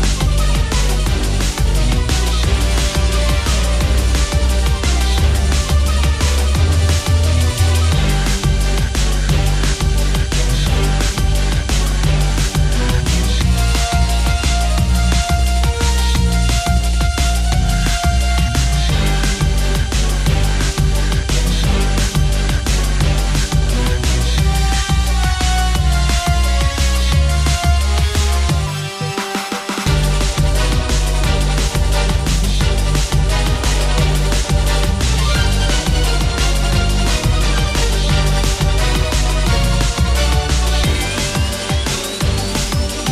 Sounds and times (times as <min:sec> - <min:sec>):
Music: 0:00.0 - 0:43.1.